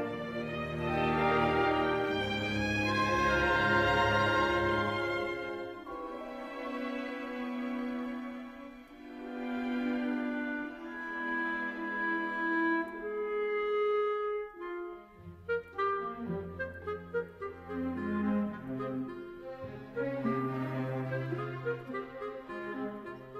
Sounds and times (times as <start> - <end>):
Clarinet: 0.0 - 23.3.